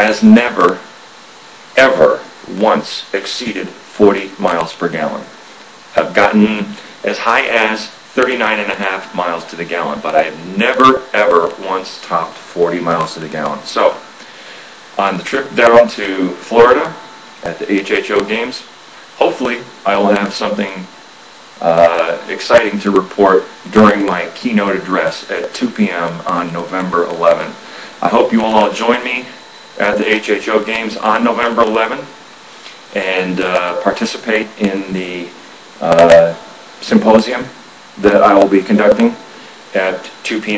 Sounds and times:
Speech: 0:00.0 - 0:00.9, 0:01.8 - 0:14.1, 0:15.0 - 0:21.0, 0:21.6 - 0:32.2, 0:32.9 - 0:40.5.

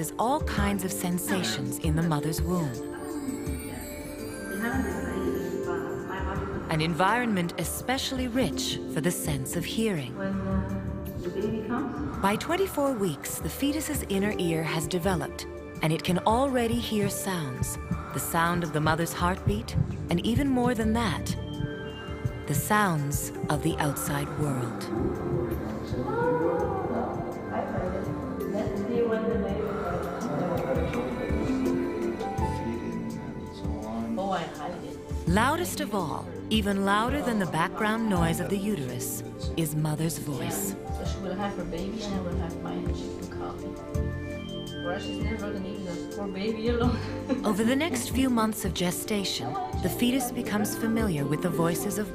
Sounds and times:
Speech: 0:00.0 - 0:02.8, 0:22.5 - 0:24.9, 0:33.8 - 0:43.6, 0:44.9 - 0:52.1
Music: 0:00.0 - 0:52.1.

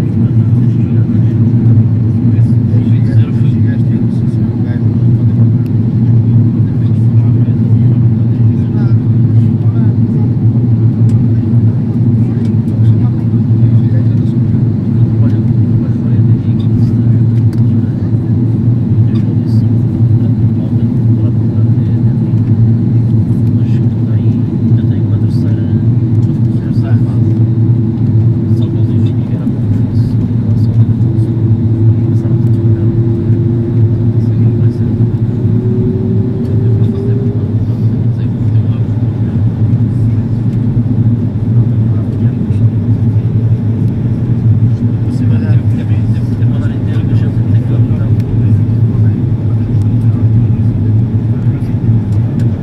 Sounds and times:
Speech: 0:00.0 - 0:27.6, 0:28.4 - 0:33.4, 0:34.0 - 0:35.5, 0:36.4 - 0:40.6, 0:41.6 - 0:52.6.

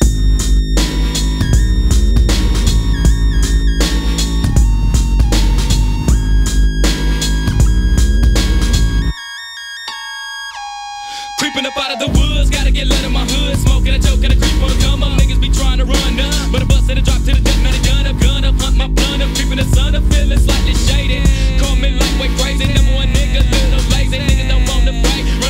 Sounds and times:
Music: 0:00.0 - 0:25.4
Singing: 0:11.4 - 0:25.4.

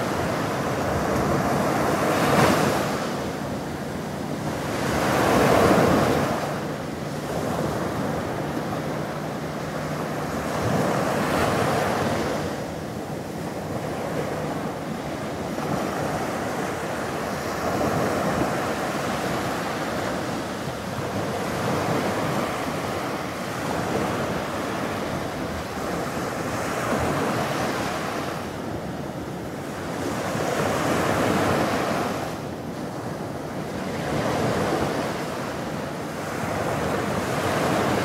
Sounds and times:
Waves, surf: 0:00.0 - 0:38.0.

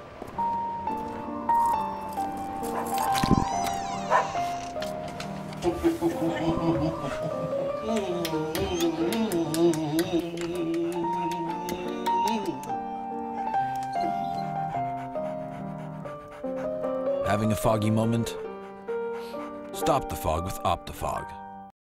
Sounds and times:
Music: 0:00.0 - 0:21.7
Dog: 0:02.6 - 0:04.8, 0:13.8 - 0:17.6
Speech: 0:17.2 - 0:18.4, 0:19.8 - 0:21.4.

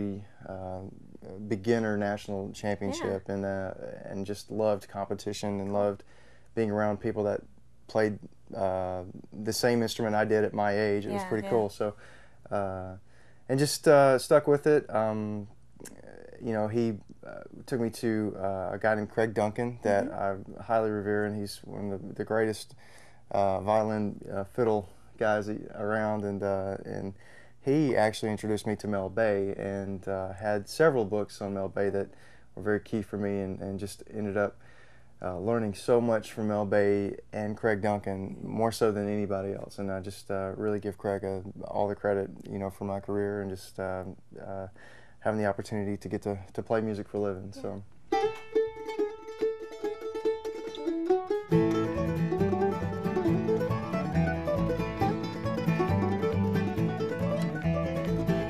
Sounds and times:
Speech: 0:00.0 - 0:06.0, 0:06.6 - 0:34.6, 0:35.2 - 0:47.8
Country: 0:00.0 - 0:34.6, 0:35.2 - 0:58.5
Guitar: 0:01.9 - 0:03.4, 0:08.0 - 0:12.6, 0:15.8 - 0:22.4, 0:47.2 - 0:58.5
Mandolin: 0:47.6 - 0:58.5.

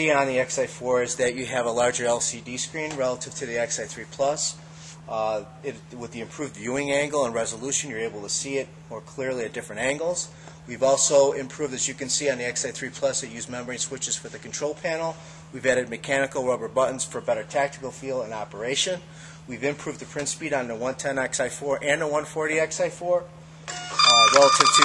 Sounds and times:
Speech: 0:00.0 - 0:23.3, 0:24.0 - 0:24.8.

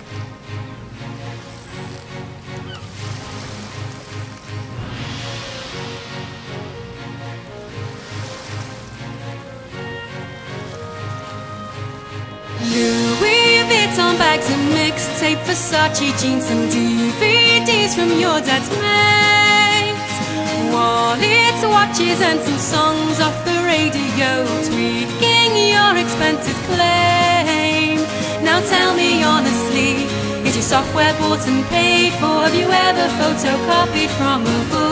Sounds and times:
Music: 0:00.0 - 0:34.9.

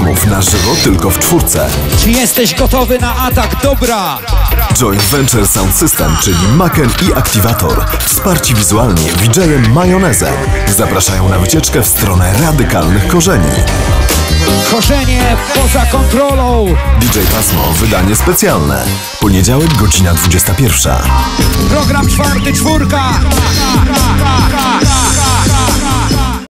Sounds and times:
Speech: 0:00.0 - 0:13.7, 0:14.4 - 0:23.3
Music: 0:00.0 - 0:26.4
Sound effect: 0:17.0 - 0:18.2.

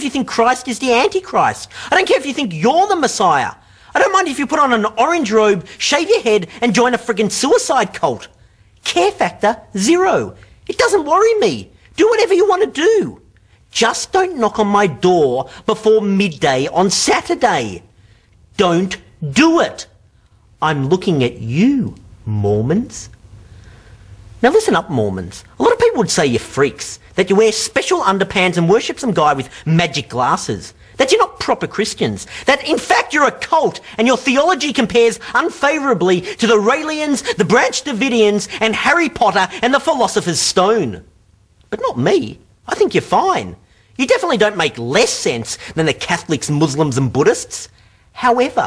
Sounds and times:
Speech: 0:00.0 - 0:17.9, 0:18.5 - 0:20.0, 0:20.6 - 0:23.2, 0:24.4 - 0:41.1, 0:41.7 - 0:48.6.

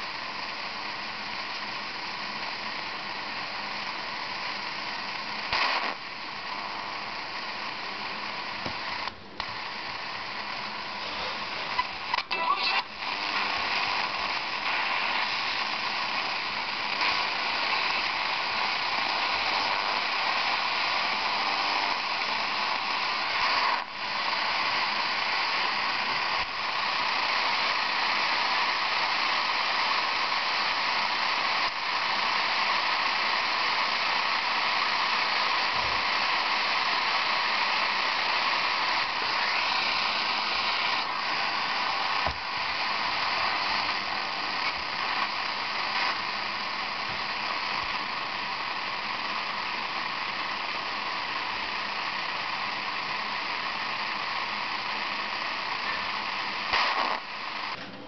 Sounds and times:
Radio: 0:00.0 - 0:58.0.

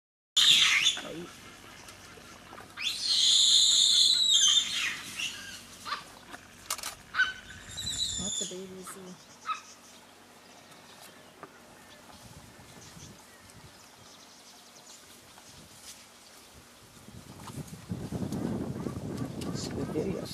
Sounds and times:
Animal: 0:00.4 - 0:06.5
Speech: 0:08.2 - 0:09.2, 0:19.4 - 0:20.3.

